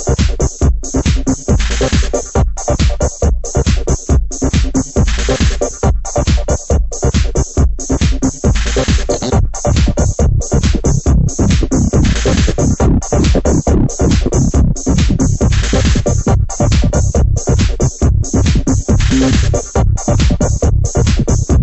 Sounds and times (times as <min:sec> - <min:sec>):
Trance music: 0:08.4 - 0:21.6.